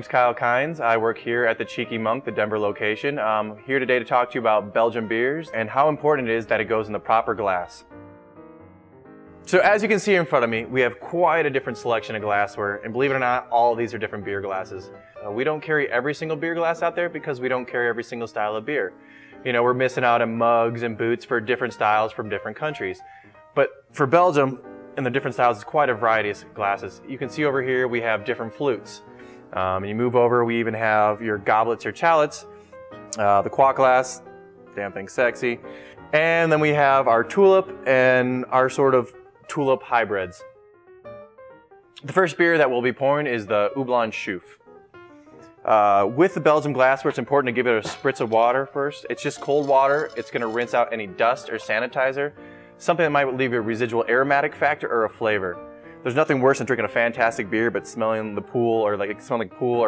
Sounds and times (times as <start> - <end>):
Speech: 0.0 - 7.9, 9.5 - 23.0, 23.6 - 29.0, 29.6 - 32.5, 33.2 - 40.5, 42.0 - 44.6, 45.7 - 59.8
Music: 0.0 - 59.8.